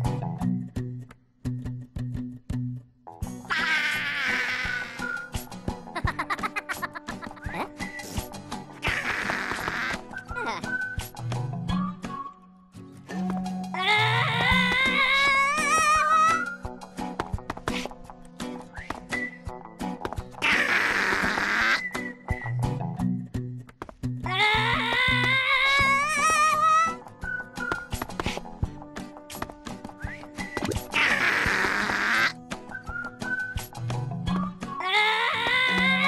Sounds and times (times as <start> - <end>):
Music: 0.0 - 36.0.